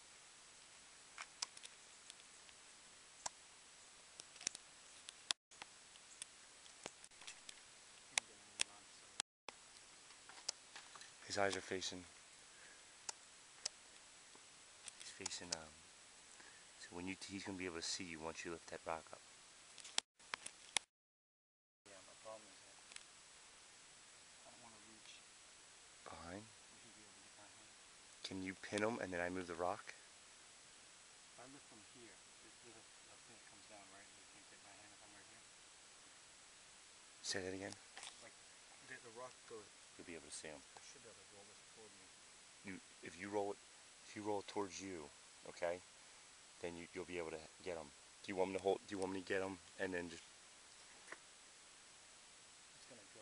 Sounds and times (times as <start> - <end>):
Speech: 8.1 - 9.2, 11.2 - 12.1, 15.0 - 15.8, 16.8 - 19.2, 21.9 - 22.8, 24.4 - 25.3, 26.0 - 30.0, 31.4 - 35.5, 37.2 - 42.1, 42.7 - 45.8, 46.6 - 50.2, 52.8 - 53.2.